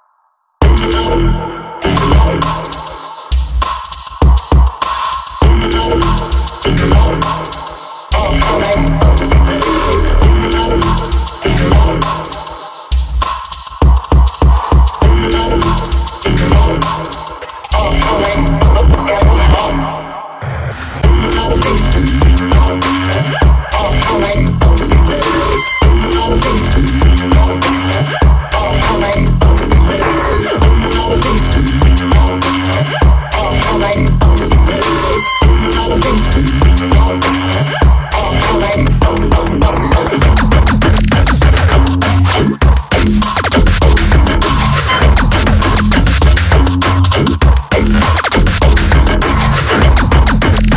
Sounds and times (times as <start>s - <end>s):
Music: 0.6s - 50.7s.